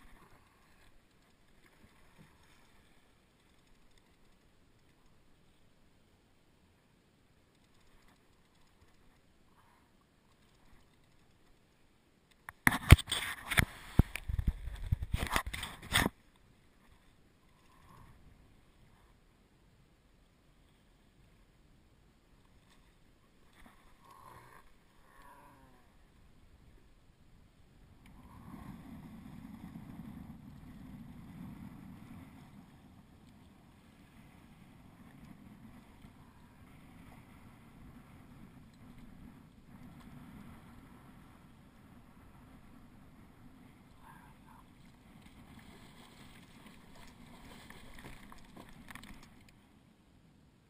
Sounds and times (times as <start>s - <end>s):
Rowboat, canoe, kayak: 0.0s - 50.6s.